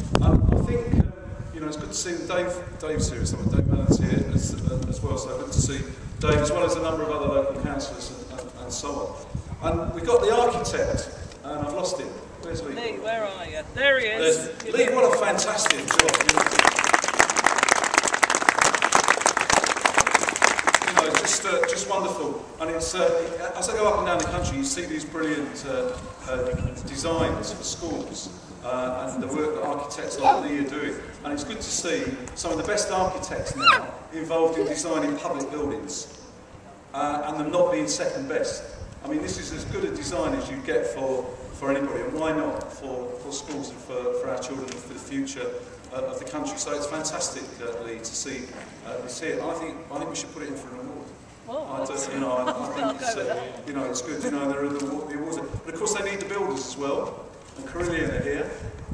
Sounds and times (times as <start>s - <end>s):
Speech: 20.9s - 36.1s, 37.0s - 58.6s.